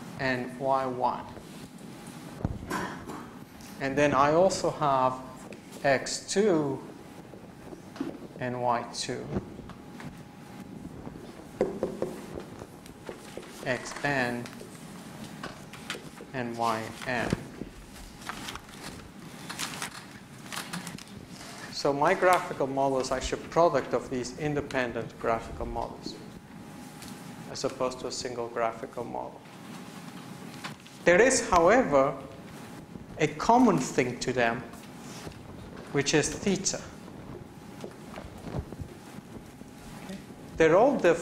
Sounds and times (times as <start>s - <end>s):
Inside, large room or hall: 0.0s - 41.2s
Speech: 0.2s - 1.4s, 3.8s - 6.9s, 8.4s - 9.4s, 13.6s - 14.6s, 16.3s - 17.5s, 21.7s - 26.3s, 27.5s - 29.4s, 31.0s - 32.3s, 33.2s - 34.7s, 35.9s - 37.0s, 40.0s - 41.2s.